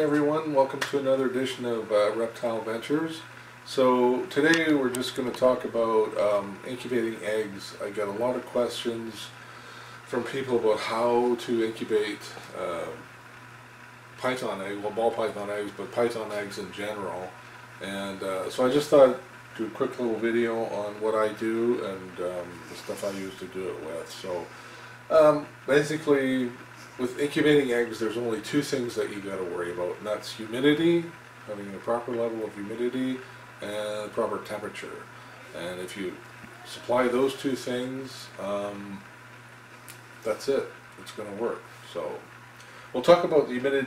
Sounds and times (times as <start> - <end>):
Speech: 0.0 - 9.4, 10.1 - 13.1, 14.2 - 24.5, 25.1 - 39.1, 40.2 - 42.3, 42.9 - 43.8
Inside, small room: 0.0 - 43.8.